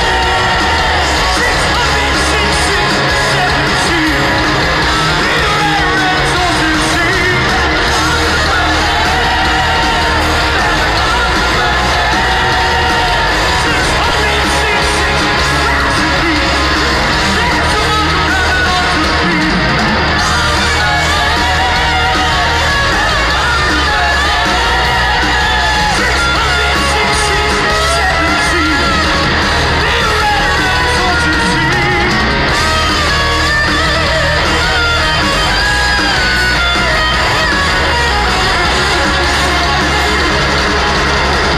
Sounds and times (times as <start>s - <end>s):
Singing: 0.0s - 40.7s
Music: 0.0s - 41.5s.